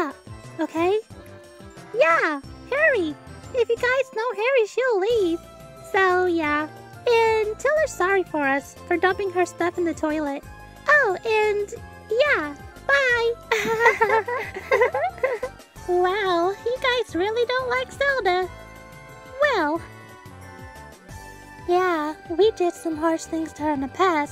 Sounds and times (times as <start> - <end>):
Speech: 0.0 - 1.0, 2.0 - 13.4, 15.9 - 18.5, 19.4 - 19.8, 21.7 - 24.3
Music: 0.0 - 24.3.